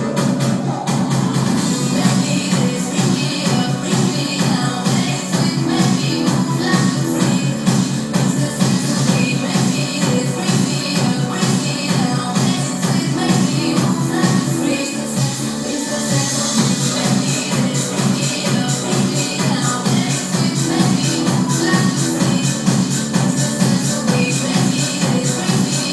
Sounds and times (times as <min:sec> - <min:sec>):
Music: 0:00.0 - 0:25.9.